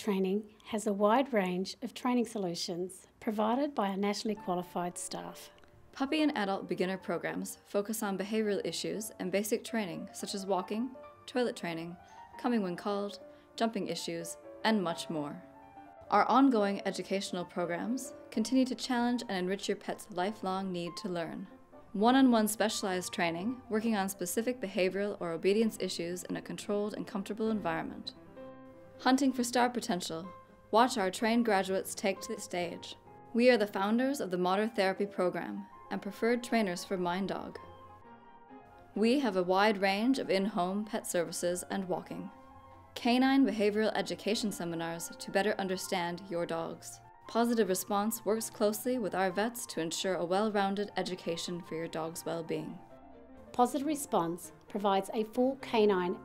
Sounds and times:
Speech: 0.0 - 15.4, 16.1 - 28.1, 29.0 - 37.6, 39.0 - 42.3, 43.0 - 52.8, 53.6 - 56.2
Music: 0.0 - 56.2.

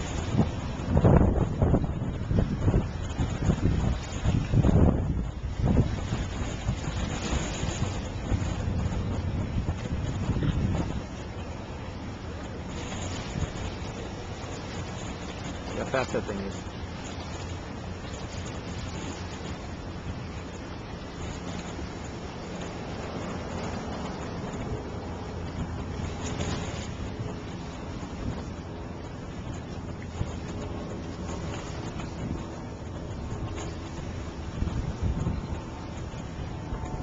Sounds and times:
Sailboat, sailing ship: 0.0 - 37.0
Speech: 15.7 - 16.6.

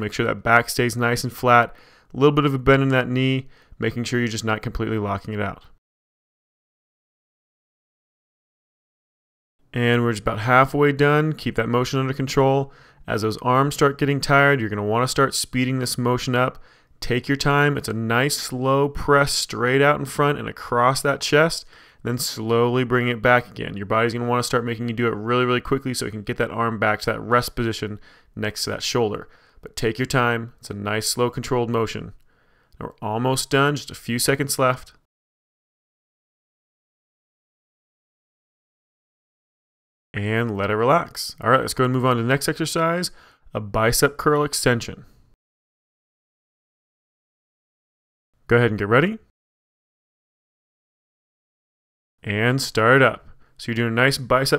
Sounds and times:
Speech: 0.0 - 5.8, 9.7 - 32.2, 32.8 - 35.1, 40.2 - 45.1, 48.5 - 49.3, 52.2 - 54.5.

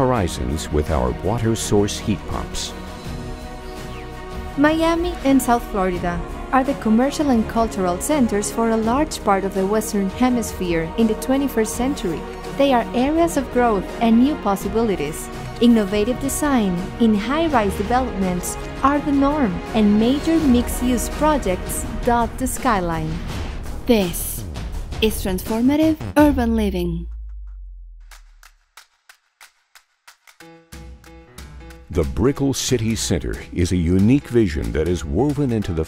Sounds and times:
Speech: 0.0 - 2.8, 4.6 - 23.2, 23.9 - 24.4, 25.0 - 27.1, 31.9 - 35.8
Music: 0.0 - 35.8.

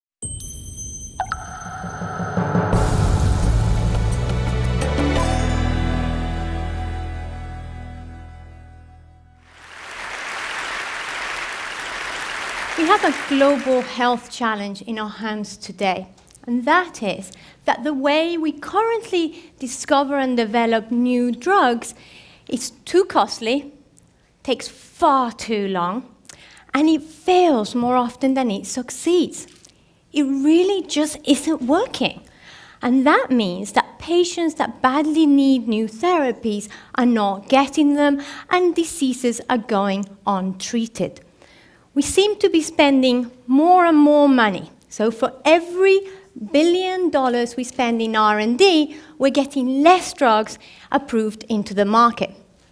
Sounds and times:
Music: 0.2 - 9.7.

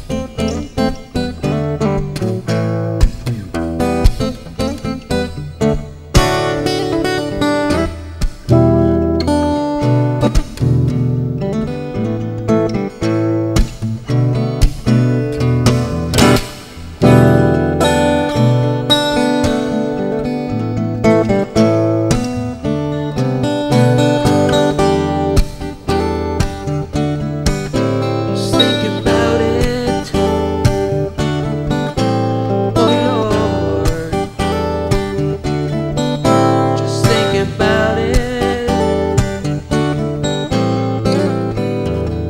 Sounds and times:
Acoustic guitar: 0.0 - 42.3.

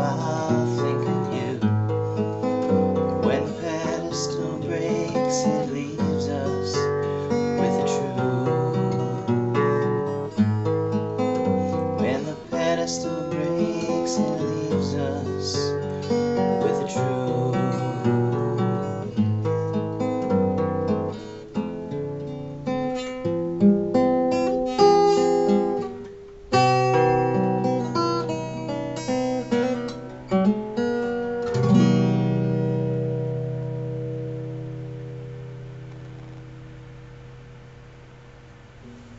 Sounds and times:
Acoustic guitar: 0.0 - 39.1.

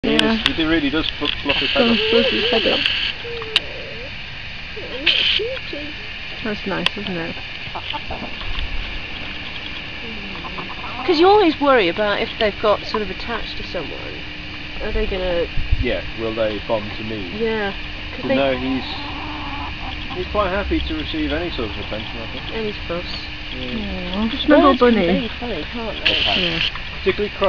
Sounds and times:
Speech: 0.0 - 4.1, 4.8 - 7.4, 11.1 - 14.2, 14.8 - 19.0, 20.2 - 27.4.

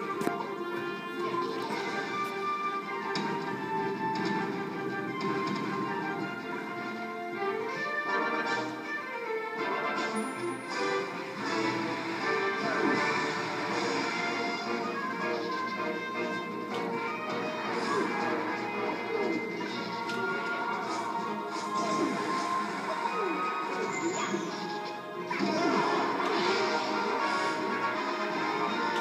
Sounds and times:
Music: 0.0 - 29.0.

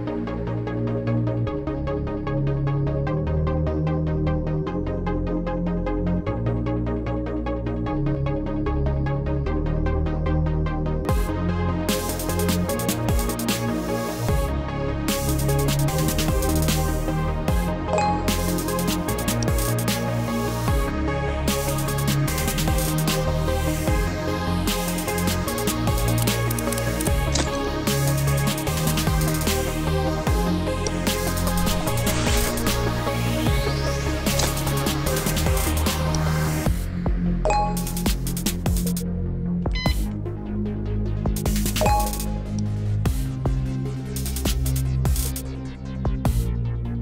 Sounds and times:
Music: 0.0 - 47.0.

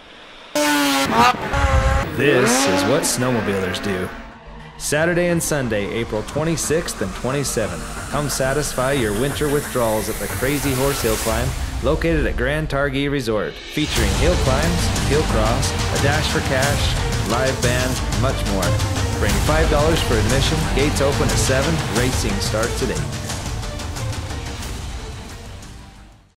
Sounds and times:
Speech: 2.2 - 4.2, 4.8 - 23.1
Music: 3.0 - 26.3.

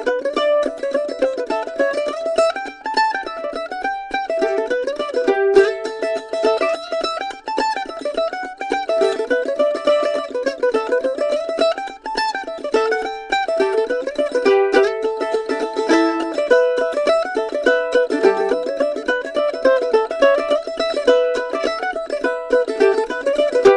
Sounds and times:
Violin, fiddle: 0.0 - 23.7.

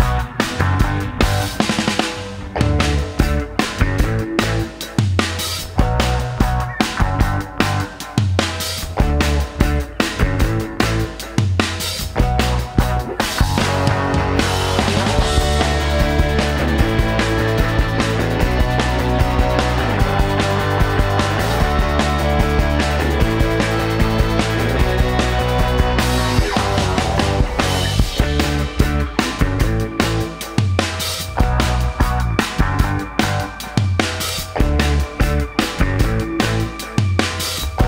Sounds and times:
Music: 0.0 - 37.8.

